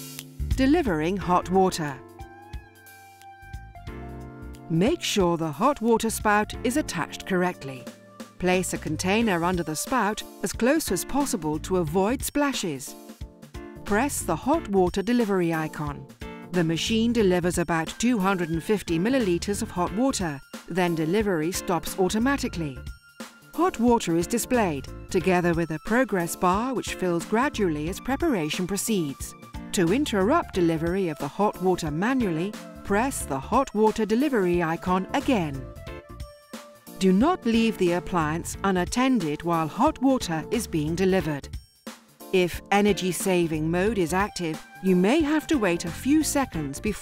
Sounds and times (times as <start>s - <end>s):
Music: 0.0s - 47.0s
Speech: 0.6s - 2.0s, 4.7s - 13.0s, 13.9s - 16.0s, 16.6s - 22.8s, 23.6s - 35.6s, 37.0s - 41.5s, 42.4s - 47.0s.